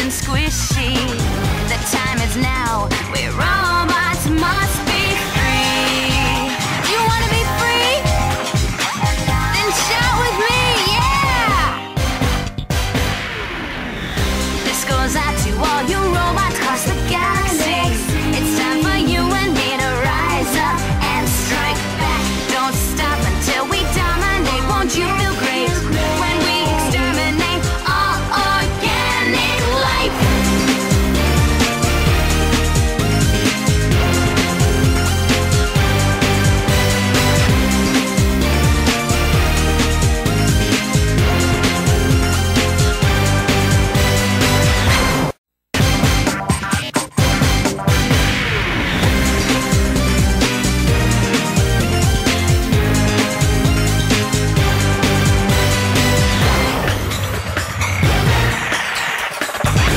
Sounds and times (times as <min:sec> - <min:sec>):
Speech: 0:00.0 - 0:04.7, 0:06.9 - 0:08.1, 0:09.5 - 0:11.8, 0:14.7 - 0:20.8
Background music: 0:00.0 - 0:59.9
Video game music: 0:02.8 - 0:59.9.